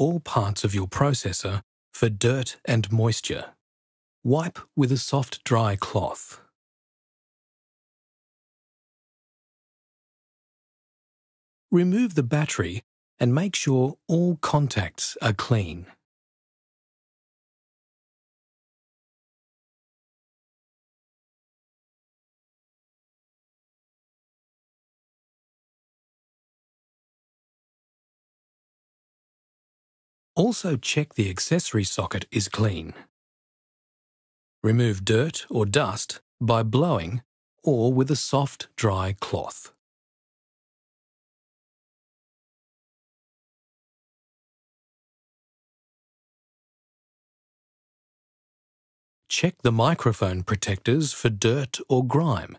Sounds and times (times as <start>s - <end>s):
Speech: 0.0s - 3.6s, 4.3s - 6.5s, 11.7s - 16.0s, 30.4s - 33.1s, 34.6s - 39.8s, 49.3s - 52.5s.